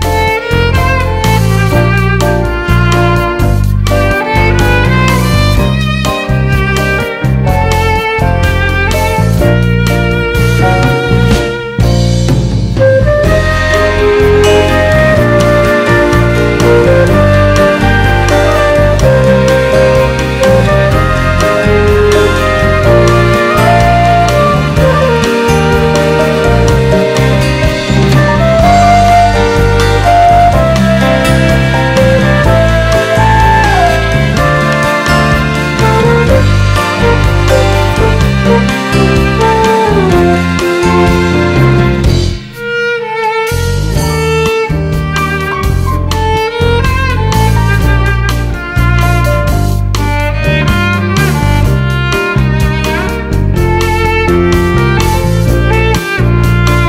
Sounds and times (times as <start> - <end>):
Tender music: 0.0 - 56.8.